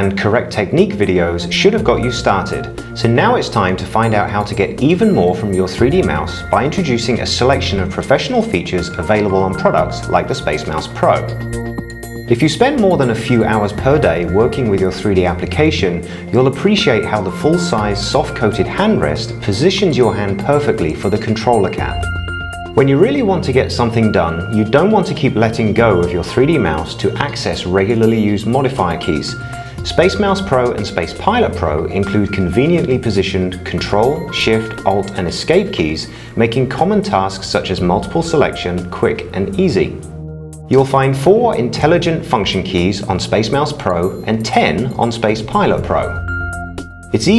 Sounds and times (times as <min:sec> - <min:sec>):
Speech: 0:00.0 - 0:11.4, 0:12.3 - 0:22.0, 0:22.8 - 0:40.1, 0:40.7 - 0:46.2, 0:47.2 - 0:47.3
Music: 0:00.0 - 0:47.3.